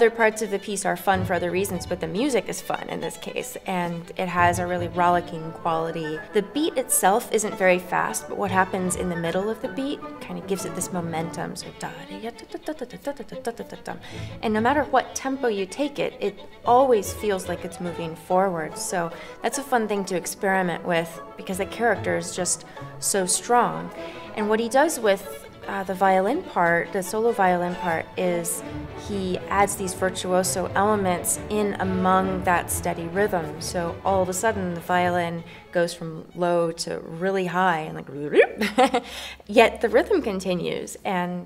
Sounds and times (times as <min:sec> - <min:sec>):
Violin, fiddle: 0:00.0 - 0:37.9
Speech: 0:00.0 - 0:38.6, 0:39.5 - 0:41.4.